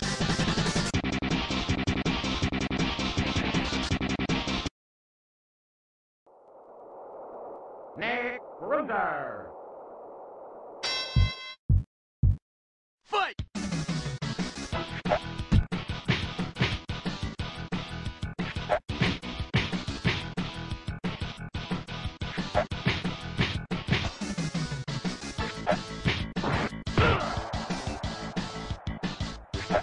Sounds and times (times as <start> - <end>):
Speech: 8.0 - 9.5, 13.1 - 13.4.